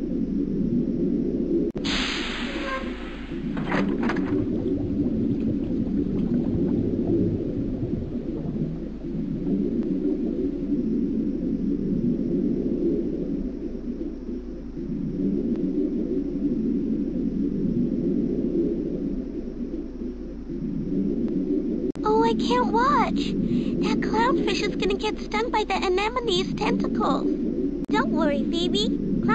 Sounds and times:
Ocean: 0.0 - 29.3.

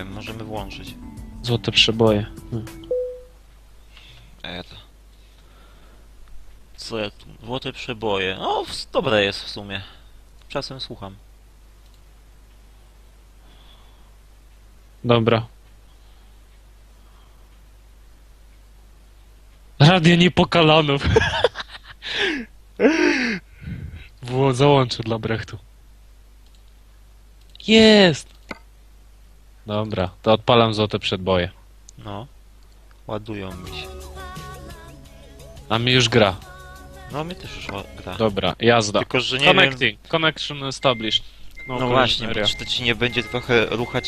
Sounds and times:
Speech: 0.0 - 0.9, 4.4 - 4.9, 6.8 - 11.2, 19.8 - 21.2, 24.2 - 25.7, 27.6 - 28.3, 29.7 - 32.3, 33.1 - 33.9, 35.7 - 36.4, 37.2 - 44.0.

